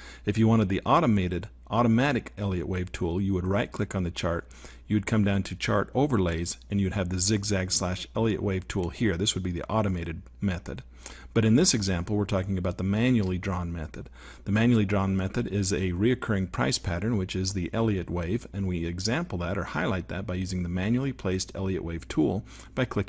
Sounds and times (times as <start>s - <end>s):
Speech: 0.3s - 23.0s.